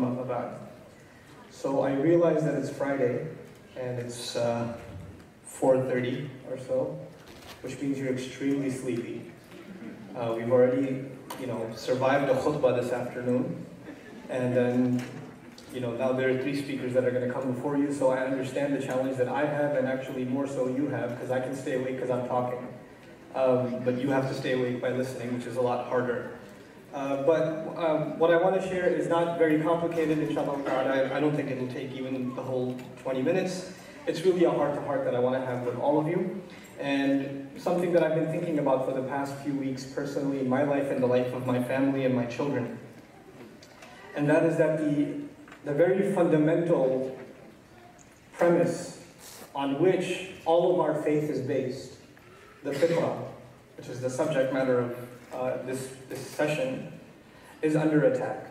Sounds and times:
Speech: 0.0 - 0.8, 1.4 - 42.9, 43.9 - 52.0, 52.6 - 57.0, 57.6 - 58.5.

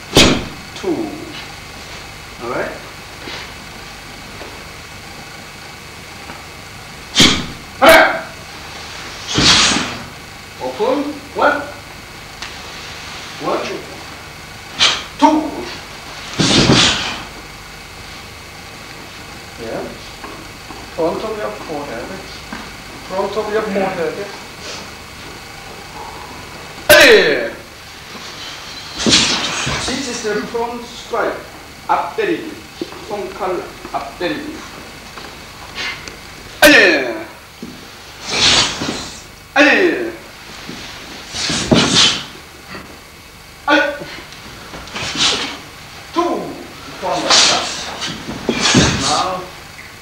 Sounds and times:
Speech: 0.8 - 1.4, 2.4 - 2.9, 7.8 - 8.4, 10.6 - 11.8, 13.4 - 14.0, 15.2 - 15.8, 19.6 - 20.1, 21.0 - 22.4, 23.0 - 24.4, 26.9 - 27.7, 29.8 - 34.7, 36.6 - 37.4, 39.6 - 40.3, 43.6 - 44.1, 46.1 - 48.0, 48.9 - 49.6.

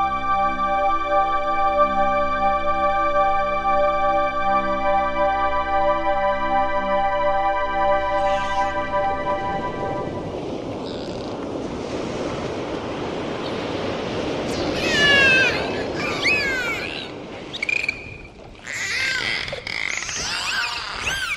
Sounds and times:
Animal: 10.8 - 11.4.

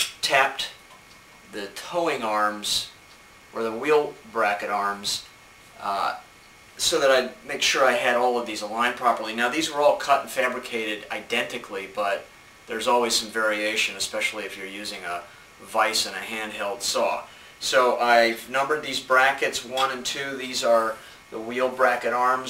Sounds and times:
Speech: 0.0 - 0.8, 1.5 - 22.4.

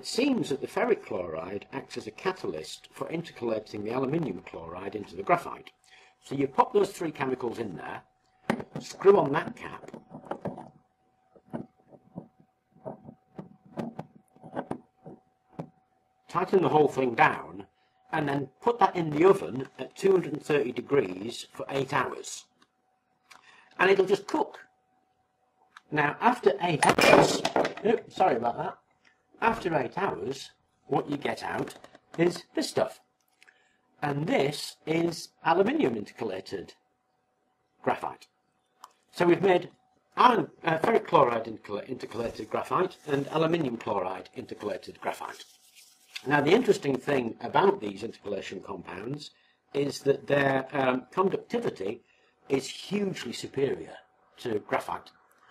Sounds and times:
Speech: 0.0 - 8.1, 8.8 - 9.9, 16.3 - 22.5, 23.8 - 24.7, 25.9 - 27.0, 27.8 - 28.8, 29.4 - 33.0, 34.0 - 36.8, 37.8 - 38.3, 39.2 - 45.5, 46.2 - 55.1
Inside, small room: 0.0 - 55.5.

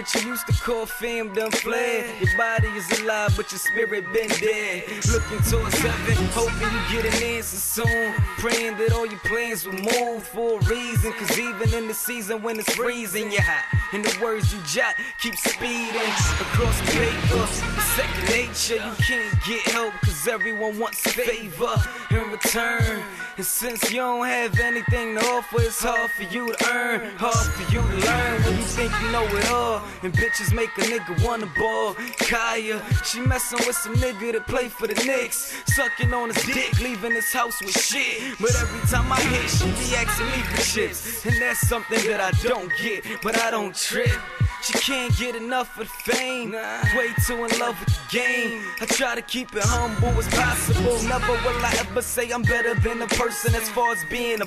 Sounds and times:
Music: 0.0 - 54.4.

